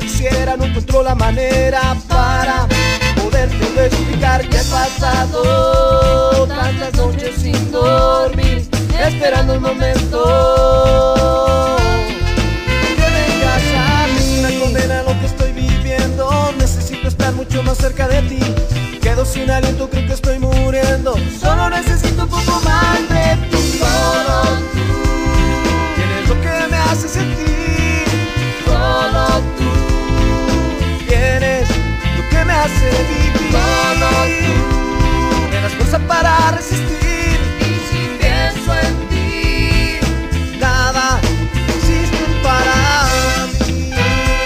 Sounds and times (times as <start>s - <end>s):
Ska: 0.0s - 44.4s.